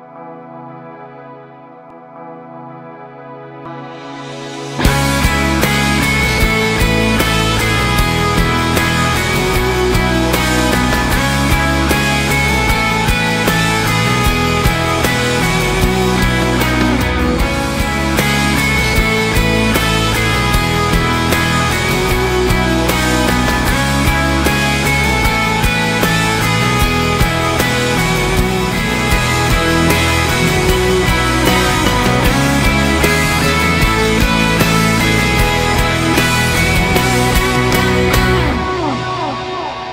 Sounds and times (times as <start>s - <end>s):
Grunge: 0.0s - 39.9s.